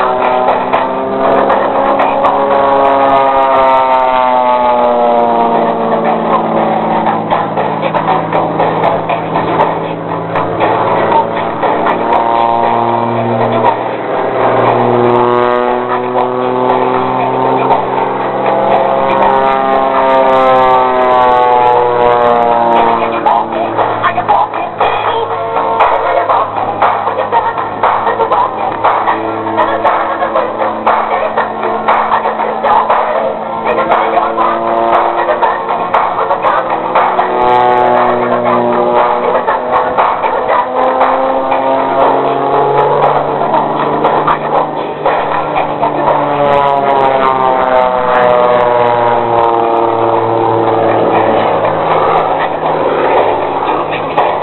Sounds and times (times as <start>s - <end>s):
Aircraft: 0.0s - 54.4s
Music: 0.0s - 54.4s.